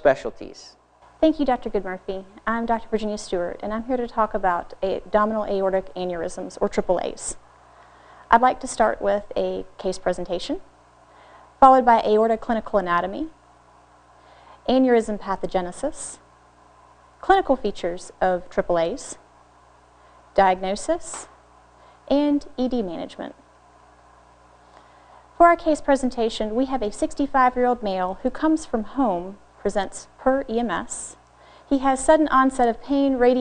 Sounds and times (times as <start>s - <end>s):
Speech: 0.0s - 7.4s, 8.3s - 10.7s, 11.6s - 13.4s, 14.7s - 16.2s, 20.4s - 21.3s, 22.1s - 23.4s, 25.4s - 33.4s.